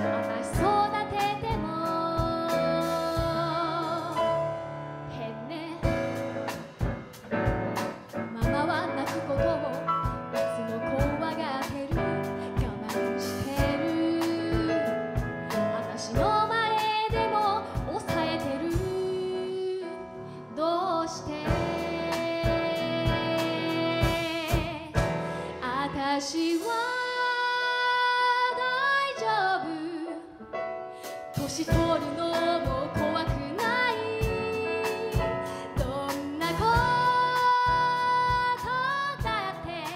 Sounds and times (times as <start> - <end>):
Music: 0.0 - 39.9.